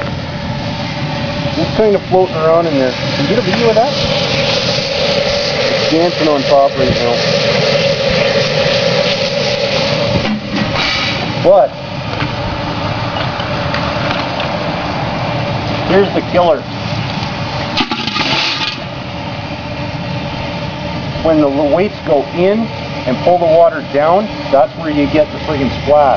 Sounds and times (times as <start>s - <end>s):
Speech: 1.6s - 4.0s, 5.9s - 7.2s, 15.9s - 16.7s, 21.2s - 26.1s.